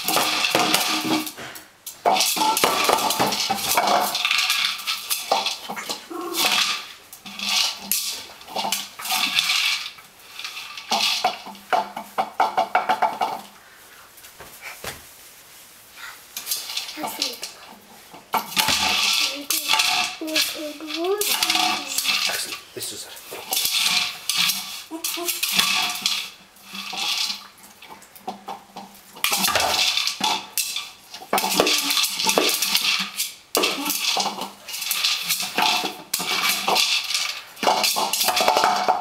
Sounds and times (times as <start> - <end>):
Speech: 17.0 - 17.6, 19.2 - 23.3.